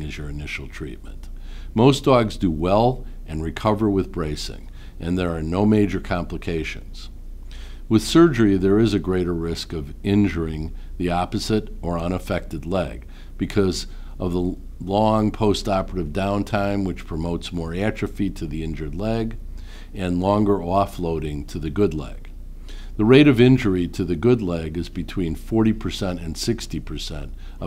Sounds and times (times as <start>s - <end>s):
Speech: 0.0s - 7.2s, 7.9s - 19.4s, 20.0s - 22.3s, 23.0s - 27.6s.